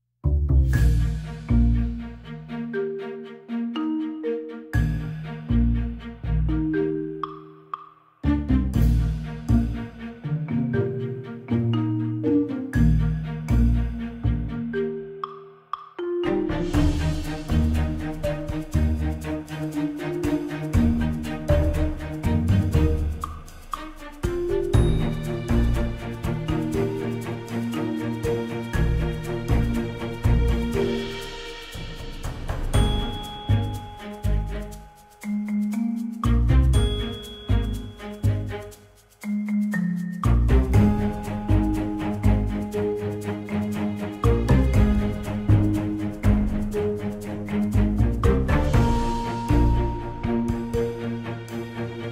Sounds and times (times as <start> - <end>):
Wood block: 0.5 - 2.9, 4.8 - 52.1.